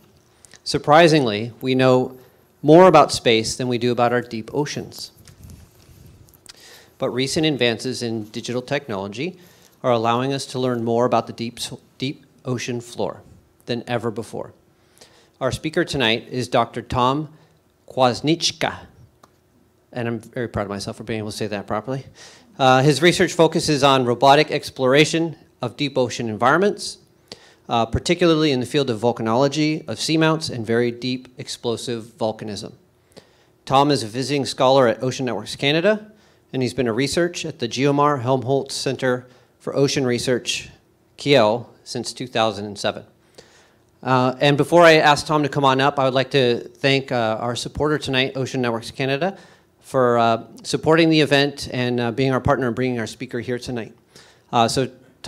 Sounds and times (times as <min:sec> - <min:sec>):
Speech: 0:00.6 - 0:05.2, 0:07.0 - 0:14.6, 0:15.4 - 0:19.0, 0:19.9 - 0:27.1, 0:27.7 - 0:32.8, 0:33.6 - 0:43.1, 0:44.0 - 0:55.2.